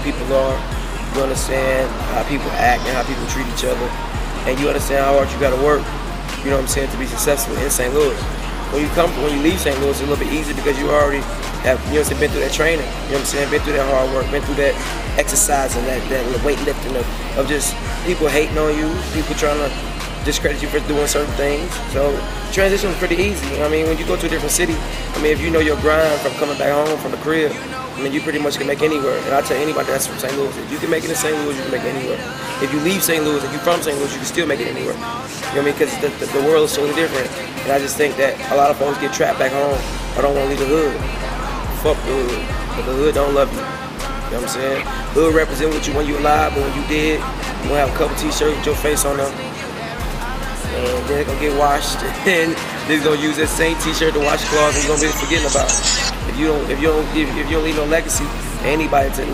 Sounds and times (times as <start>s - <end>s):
Speech: 0.0s - 43.7s, 44.3s - 49.4s, 50.6s - 59.3s
Music: 0.0s - 59.3s.